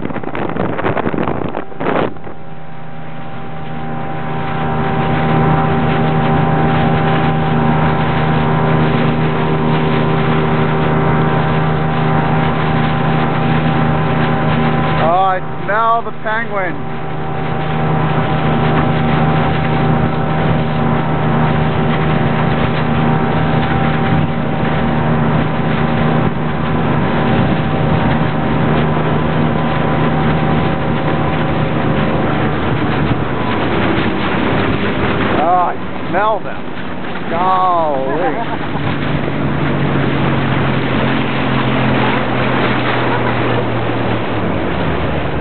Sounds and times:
Motorboat, speedboat: 0.0s - 45.4s
Ship: 0.0s - 45.4s
Speech: 15.0s - 16.8s, 37.3s - 38.5s.

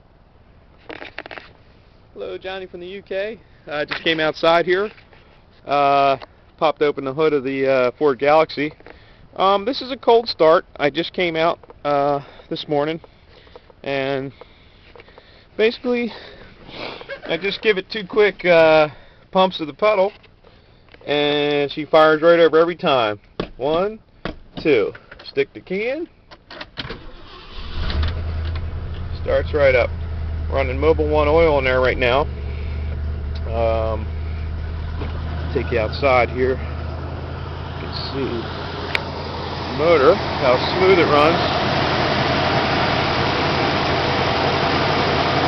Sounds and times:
Car: 0.0s - 7.3s, 26.3s - 45.4s
Speech: 2.2s - 5.0s, 5.6s - 8.8s, 9.4s - 13.0s, 13.8s - 14.3s, 15.6s - 16.2s, 17.3s - 20.2s, 21.0s - 24.0s, 24.6s - 26.1s, 29.1s - 29.9s, 30.5s - 32.3s, 33.4s - 34.1s, 35.5s - 36.6s, 37.8s - 38.5s, 39.7s - 41.6s.

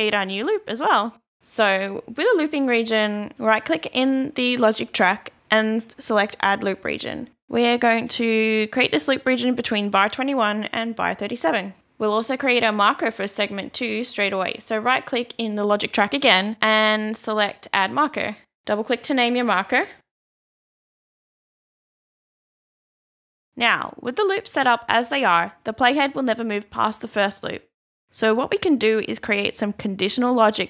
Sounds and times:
Speech: 0.0s - 20.0s, 23.6s - 30.6s.

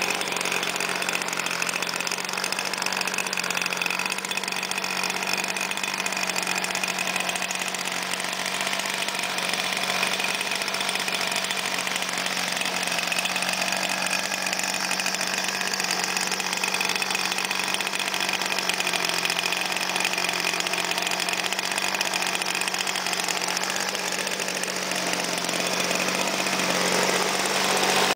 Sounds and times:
Heavy engine (low frequency): 0.0s - 28.1s.

